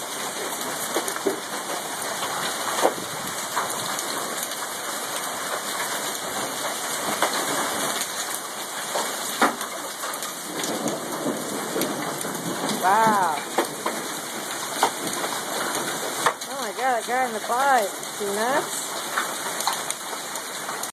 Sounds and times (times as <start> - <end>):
Speech: 12.8 - 13.5, 16.5 - 18.9.